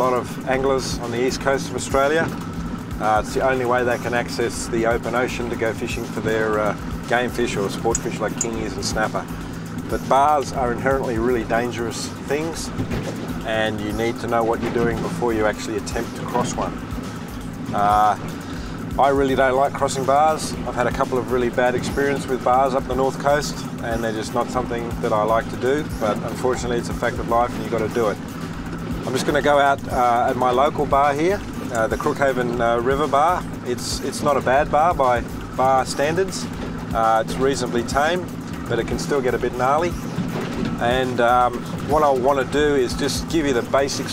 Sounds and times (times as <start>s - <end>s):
Speech: 0.0s - 2.3s, 3.0s - 9.3s, 9.9s - 12.8s, 13.5s - 16.8s, 17.7s - 18.2s, 19.0s - 28.2s, 29.1s - 40.0s, 40.8s - 44.1s
Music: 0.0s - 44.1s.